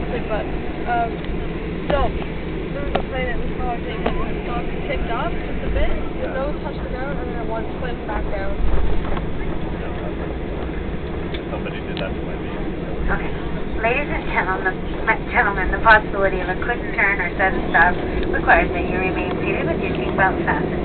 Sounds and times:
Speech: 0.0s - 1.2s, 1.9s - 2.2s, 2.8s - 10.3s, 11.4s - 20.8s.

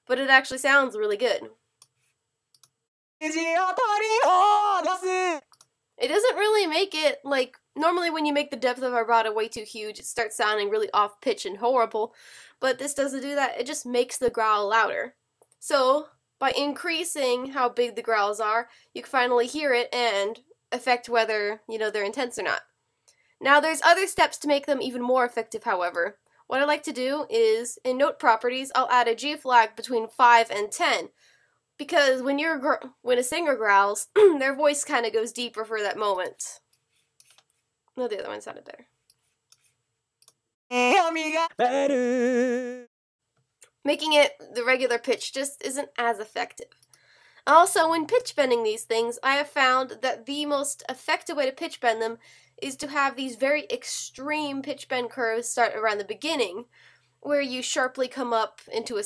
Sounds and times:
Speech: 0.0s - 1.5s, 6.0s - 22.6s, 23.4s - 31.1s, 31.8s - 36.6s, 38.0s - 38.8s, 40.7s - 42.9s, 43.8s - 46.6s, 47.5s - 59.0s
Clicking: 1.8s - 2.8s, 5.5s - 5.7s, 39.1s - 40.4s.

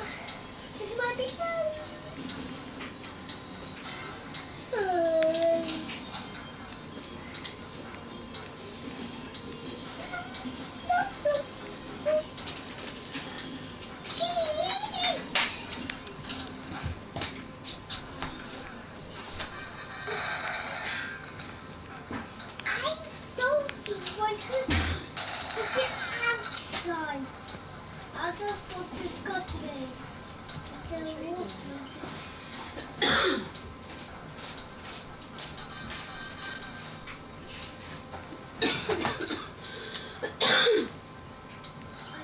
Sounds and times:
Inside, small room: 0.0s - 42.2s
Child speech, kid speaking: 0.8s - 2.2s, 4.7s - 6.0s, 10.0s - 12.3s, 14.1s - 15.3s, 22.6s - 25.0s, 25.6s - 27.3s, 28.1s - 30.0s, 30.7s - 32.1s.

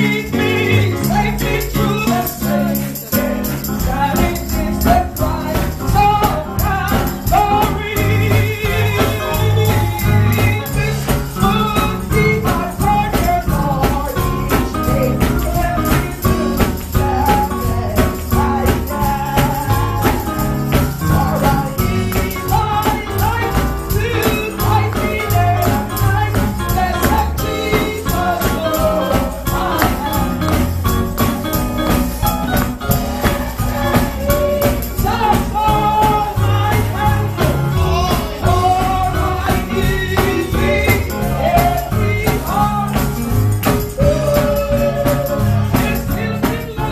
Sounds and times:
Music: 0.0s - 46.9s.

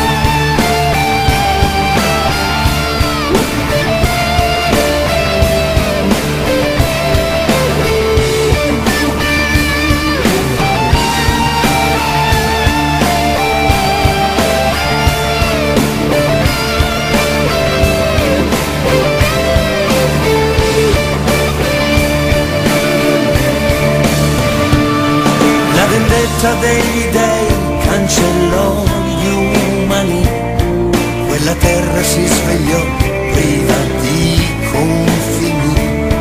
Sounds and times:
Music: 0.0s - 36.2s.

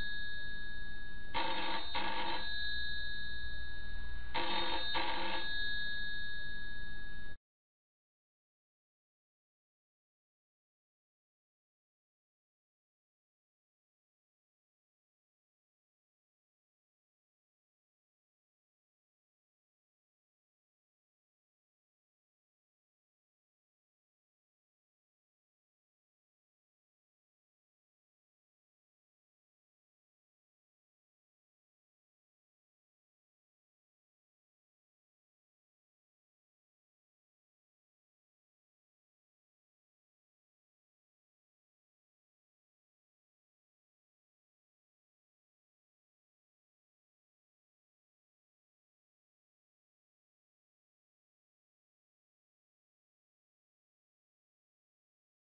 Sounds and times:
Inside, small room: 0.0s - 7.4s
Telephone: 0.0s - 7.4s.

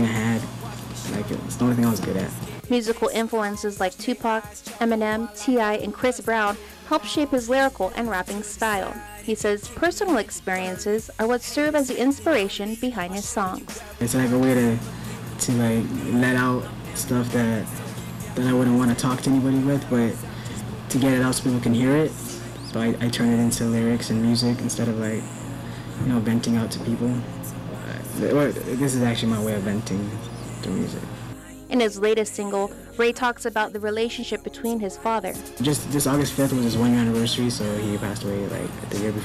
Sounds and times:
Speech: 0.0s - 17.8s, 18.4s - 20.2s, 20.9s - 25.3s, 26.0s - 31.1s, 31.7s - 39.2s
Music: 0.0s - 39.2s.

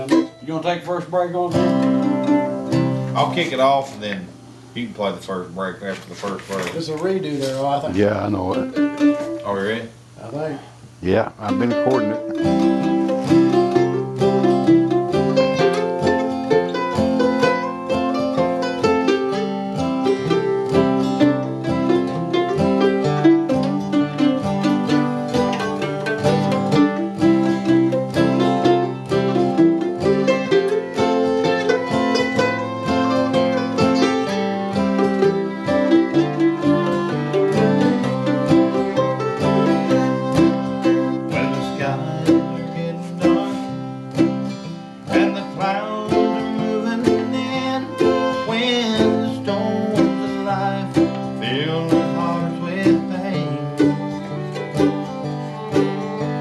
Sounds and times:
Speech: 0.0s - 1.6s, 3.2s - 8.7s, 9.5s - 12.2s
Guitar: 0.0s - 56.4s.

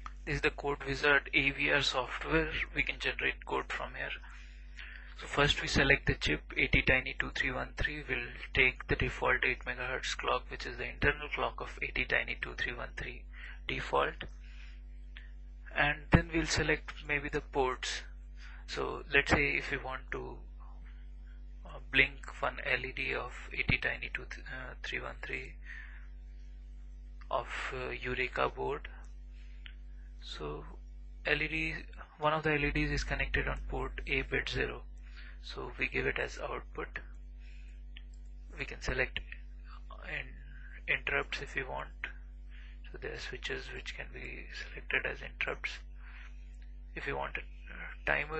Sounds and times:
Speech: 0.0s - 4.4s, 5.2s - 14.3s, 15.7s - 18.1s, 18.7s - 20.5s, 21.7s - 25.8s, 27.3s - 29.0s, 30.2s - 37.1s, 38.6s - 42.2s, 42.9s - 45.9s, 47.0s - 48.3s.

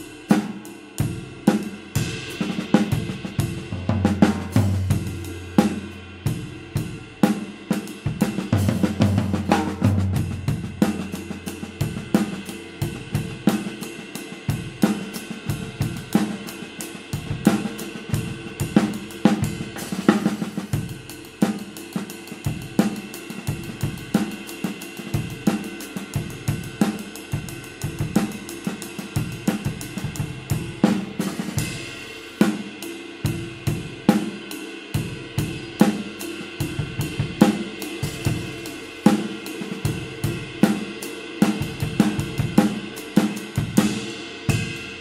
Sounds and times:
Music: 0.0s - 45.0s.

